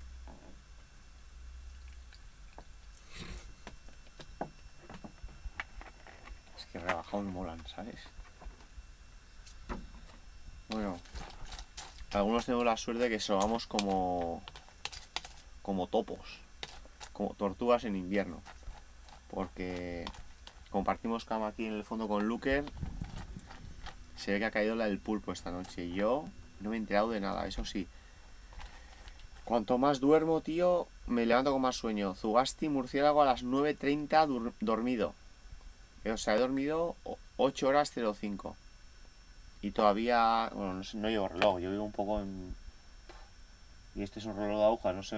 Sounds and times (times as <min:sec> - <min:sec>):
Speech: 0:06.6 - 0:08.1, 0:10.7 - 0:11.0, 0:12.1 - 0:14.5, 0:15.6 - 0:16.4, 0:17.1 - 0:18.5, 0:19.3 - 0:22.8, 0:24.2 - 0:27.9, 0:29.4 - 0:35.2, 0:36.0 - 0:38.6, 0:39.6 - 0:42.6, 0:44.0 - 0:45.1.